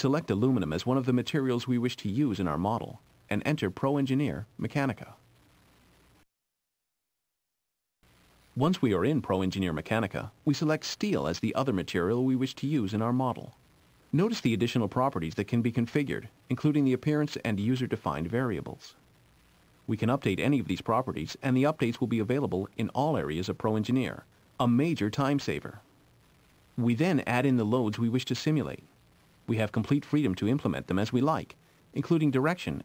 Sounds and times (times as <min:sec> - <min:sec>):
Speech: 0:00.0 - 0:05.2, 0:08.6 - 0:19.0, 0:19.9 - 0:25.9, 0:26.8 - 0:28.9, 0:29.5 - 0:32.8.